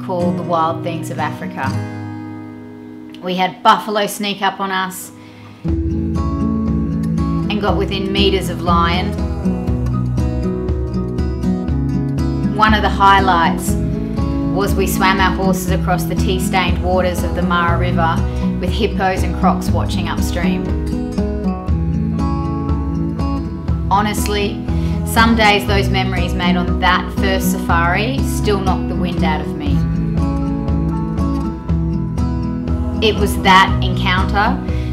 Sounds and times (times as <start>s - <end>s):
Speech: 0.0s - 1.8s, 3.2s - 5.1s, 7.5s - 9.2s, 12.6s - 13.8s, 14.6s - 20.7s, 23.9s - 29.8s, 33.0s - 34.6s
Music: 0.0s - 34.9s.